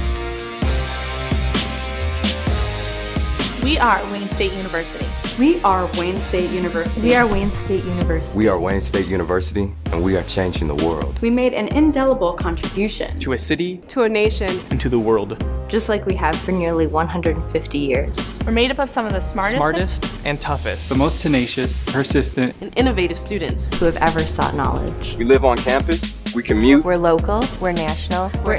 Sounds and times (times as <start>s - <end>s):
Music: 0.0s - 28.5s
Speech: 3.6s - 28.5s.